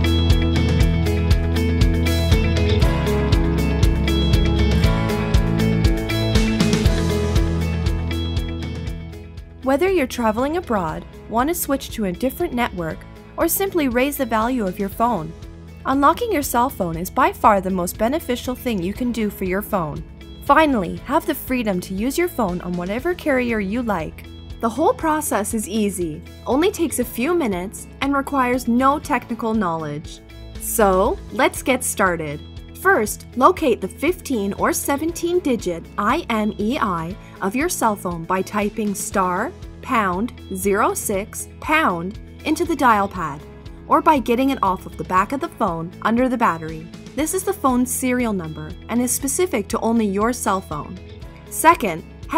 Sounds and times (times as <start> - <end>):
Music: 0.0 - 52.3
Speech: 9.6 - 15.3, 15.9 - 52.3.